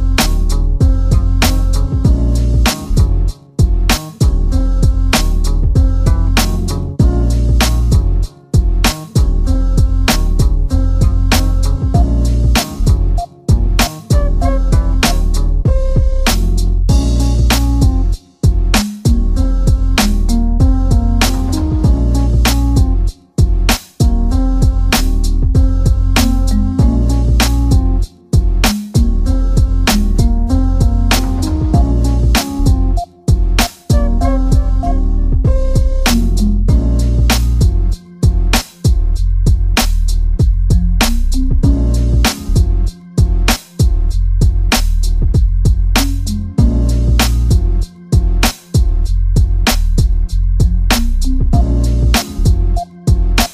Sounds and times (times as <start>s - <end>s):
Jazz: 0.0s - 53.5s.